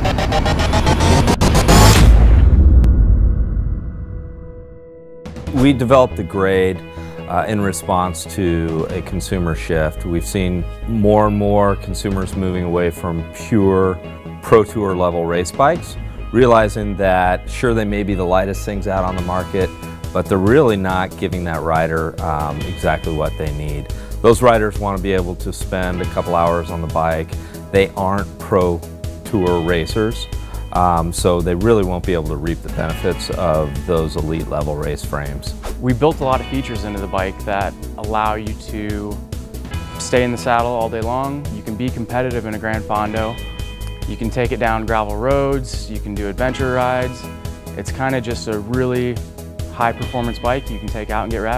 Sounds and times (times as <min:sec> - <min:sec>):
Music: 0:00.0 - 0:51.5
Speech: 0:05.5 - 0:39.2, 0:40.0 - 0:43.4, 0:44.1 - 0:51.5.